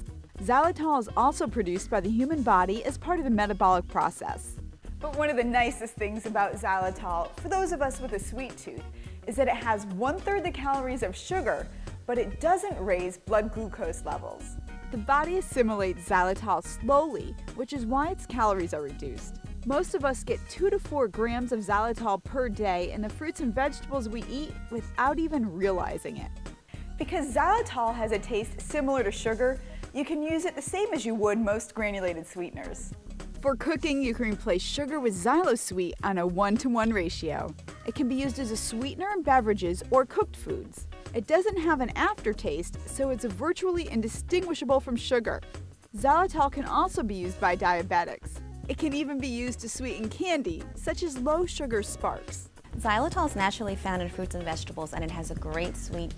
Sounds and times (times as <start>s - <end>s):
Music: 0.0s - 56.1s
Speech: 0.4s - 26.4s, 27.0s - 45.4s, 46.0s - 56.1s.